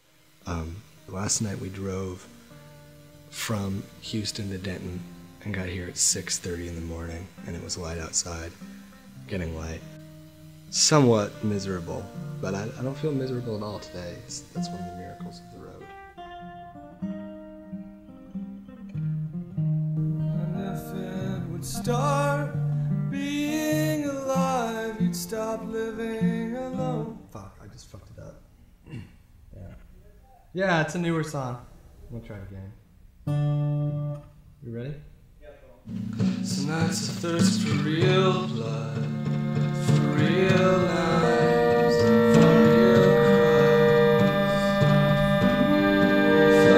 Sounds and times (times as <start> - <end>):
Music: 0.0 - 27.9, 33.2 - 35.1, 35.9 - 46.7
Speech: 0.5 - 2.3, 3.4 - 8.5, 9.3 - 9.8, 10.7 - 15.9, 26.8 - 28.4, 29.5 - 32.8, 34.6 - 35.9.